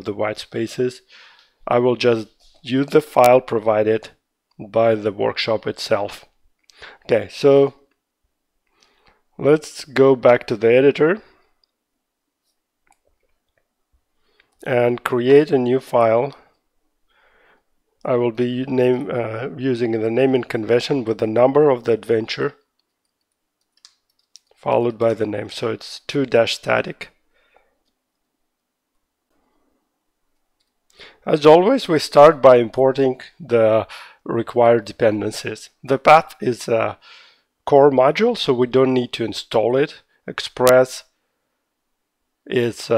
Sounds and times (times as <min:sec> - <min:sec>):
Speech: 0:00.0 - 0:06.3, 0:07.0 - 0:07.9, 0:09.4 - 0:11.4, 0:14.6 - 0:16.5, 0:18.0 - 0:22.6, 0:24.6 - 0:27.2, 0:31.2 - 0:37.0, 0:37.6 - 0:41.1, 0:42.4 - 0:42.9.